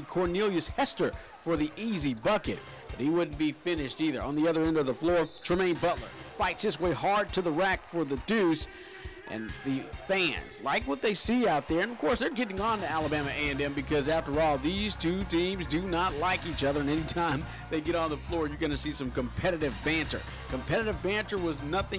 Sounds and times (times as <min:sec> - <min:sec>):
Music: 0:00.0 - 0:21.9
Speech: 0:00.0 - 0:21.9.